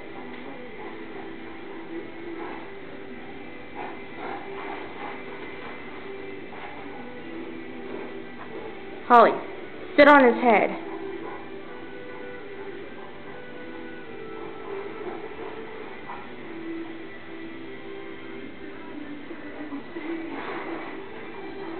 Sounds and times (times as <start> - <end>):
Music: 0.0 - 21.7
Speech: 9.1 - 10.8.